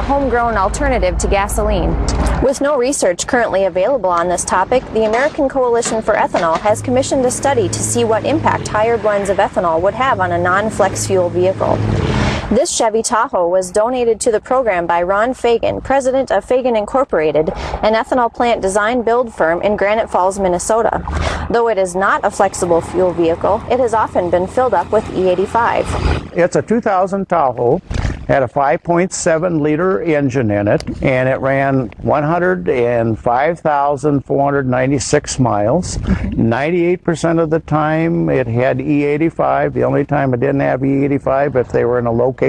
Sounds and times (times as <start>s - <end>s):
Speech: 0.0s - 11.8s, 12.5s - 42.4s.